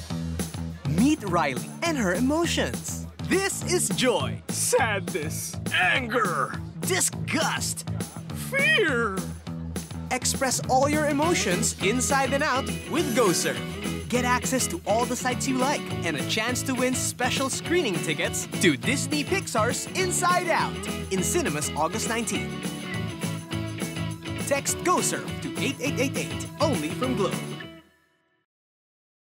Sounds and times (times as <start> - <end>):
Music: 0.0 - 28.5
Speech: 0.9 - 9.4, 10.1 - 22.5, 24.5 - 27.4.